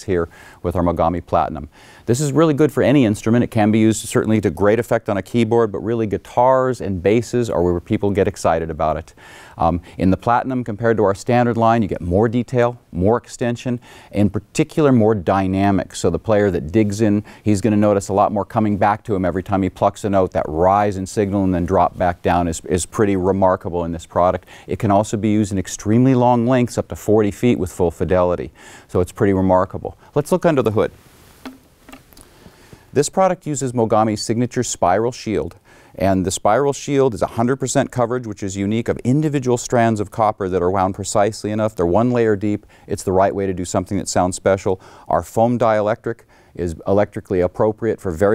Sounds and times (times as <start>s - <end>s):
Speech: 0.0s - 31.0s, 33.0s - 48.3s.